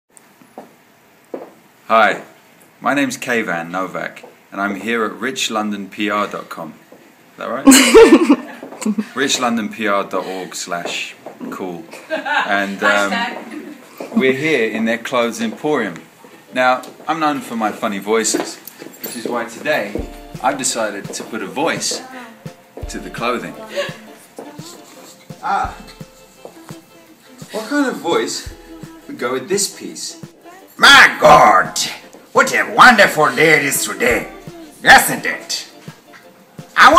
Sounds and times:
Chuckle, chortle: 7.7s - 9.1s.

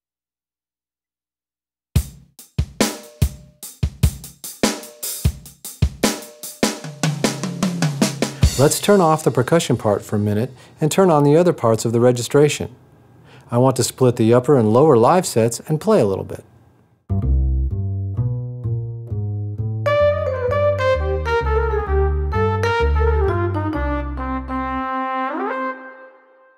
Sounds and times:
Music: 2.0s - 10.6s, 17.1s - 26.5s
Speech: 8.5s - 12.8s, 13.5s - 16.5s.

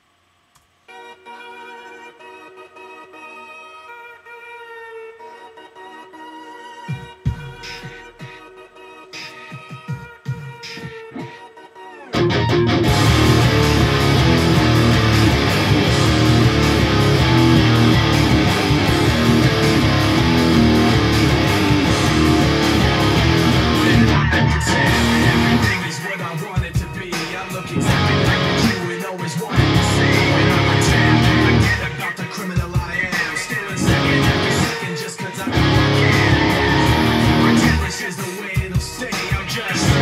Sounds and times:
Guitar: 10.6s - 40.0s.

